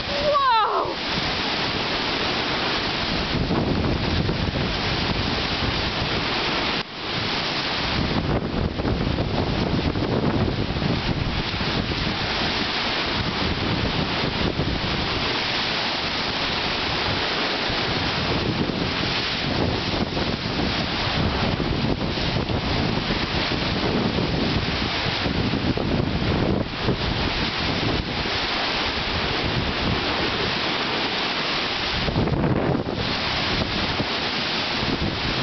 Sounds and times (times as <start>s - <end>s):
Waves, surf: 0.0s - 35.4s
Wind noise (microphone): 0.0s - 35.4s.